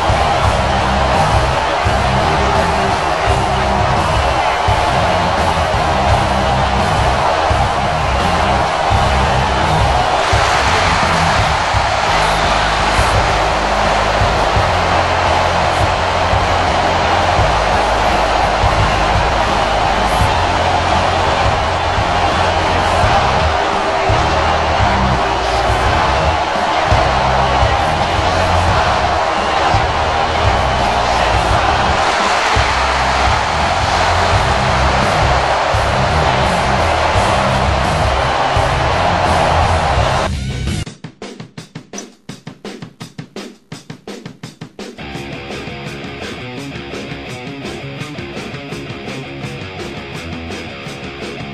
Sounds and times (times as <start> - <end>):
Music: 0.0 - 51.5.